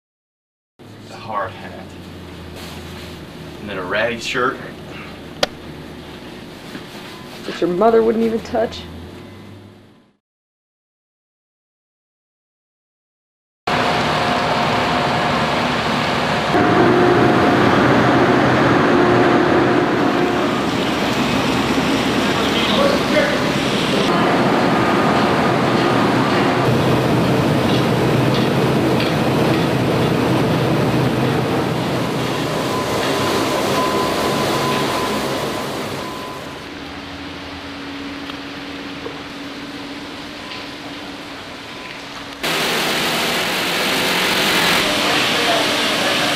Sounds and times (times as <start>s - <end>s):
Speech: 1.1s - 2.0s, 3.6s - 4.8s, 7.5s - 8.9s, 22.4s - 23.6s, 44.8s - 46.3s.